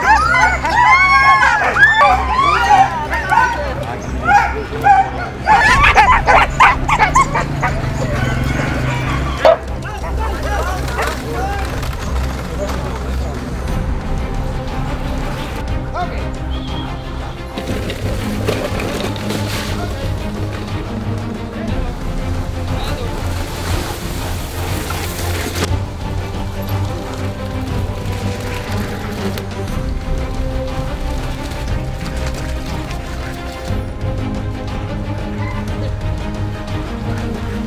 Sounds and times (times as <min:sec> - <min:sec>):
Music: 0:00.0 - 0:37.6.